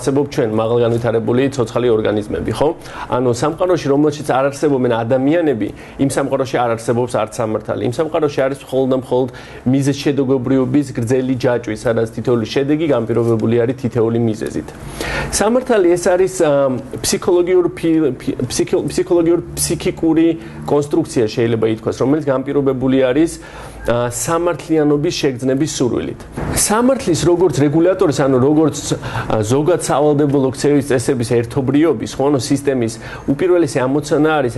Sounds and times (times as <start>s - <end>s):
Male speech, man speaking: 0.0s - 34.5s
Narration, monologue: 0.0s - 34.5s.